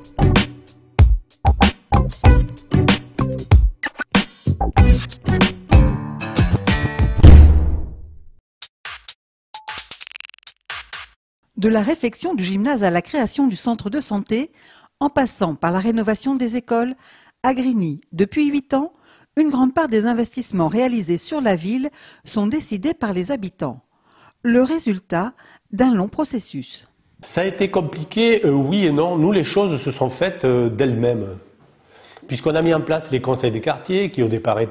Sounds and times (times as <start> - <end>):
Speech: 11.6 - 23.8, 24.5 - 31.5, 32.3 - 34.7.